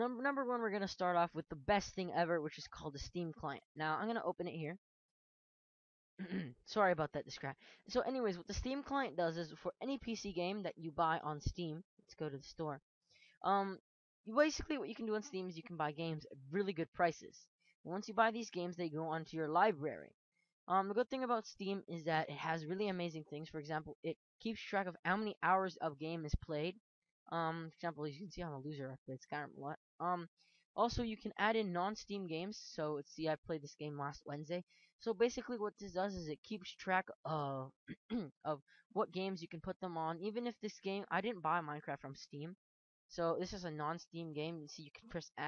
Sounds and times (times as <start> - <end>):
Speech: 0.0 - 4.8, 6.2 - 12.8, 13.4 - 20.1, 20.7 - 45.4.